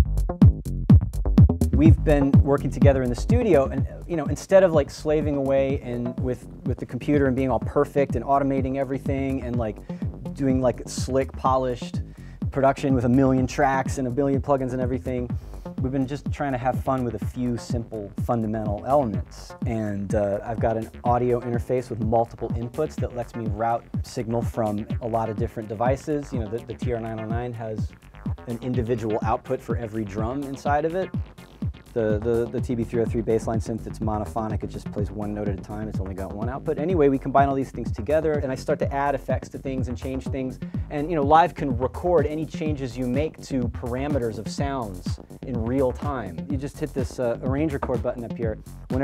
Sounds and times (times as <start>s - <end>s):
Techno: 0.0s - 49.0s
Speech: 1.8s - 9.8s, 10.4s - 27.9s, 28.5s - 31.1s, 32.0s - 49.0s.